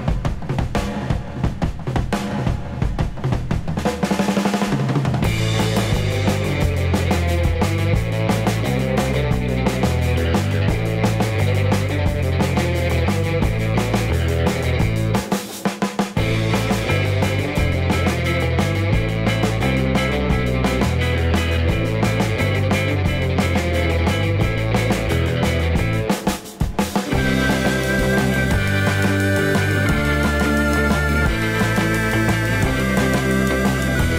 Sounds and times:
Drum kit: 0.0 - 34.1.

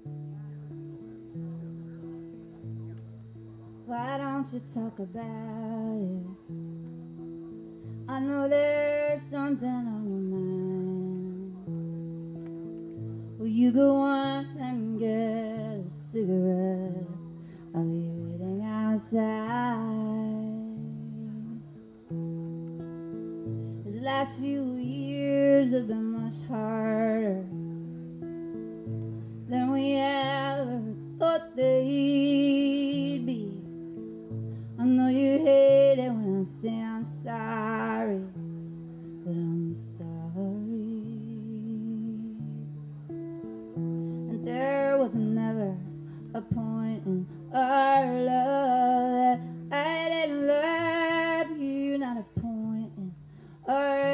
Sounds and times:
Music: 0.0 - 54.1.

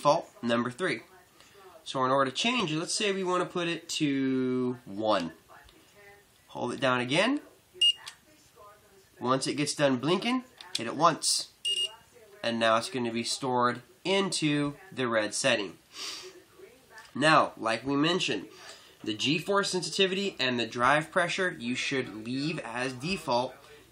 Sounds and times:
Inside, small room: 0.0 - 23.9
Speech: 0.0 - 23.9.

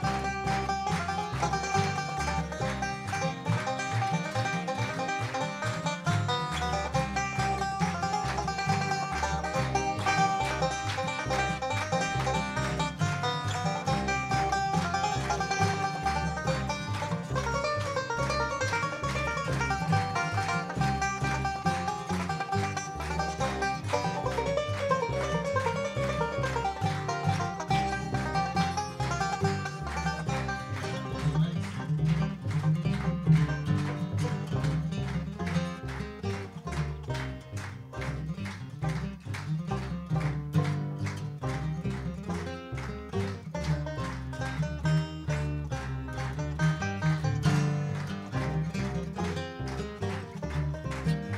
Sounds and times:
Bluegrass: 0.0 - 51.3.

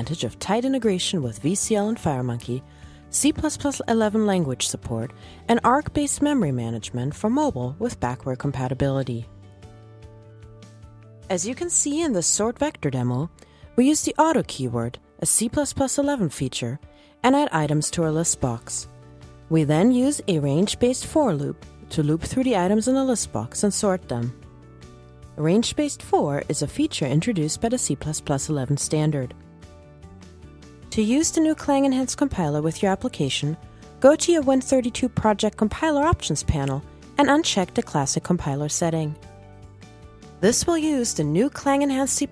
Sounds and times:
Speech: 0.0 - 9.3, 11.3 - 18.9, 19.5 - 24.4, 25.4 - 29.3, 30.9 - 39.2, 40.4 - 42.3
Music: 0.0 - 42.3.

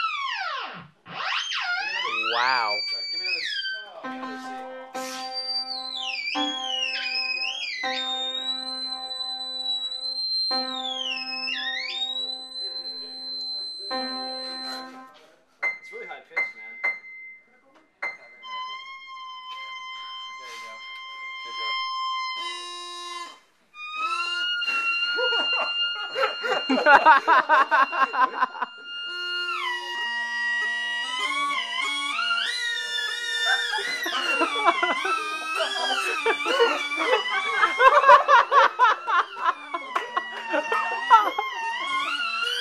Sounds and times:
Music: 4.0 - 15.2, 18.0 - 37.8.

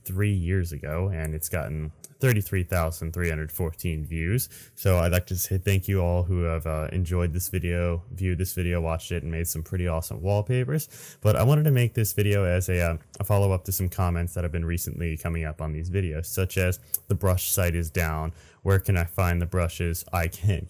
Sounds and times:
Speech: 0.0 - 20.7.

